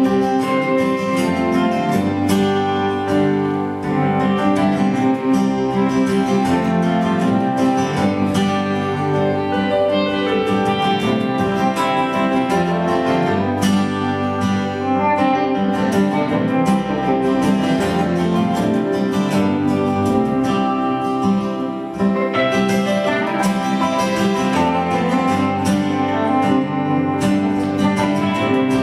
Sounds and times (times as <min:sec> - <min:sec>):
Bowed string instrument: 0:00.0 - 0:28.8
Jazz: 0:00.0 - 0:28.8
Plucked string instrument: 0:00.0 - 0:28.8.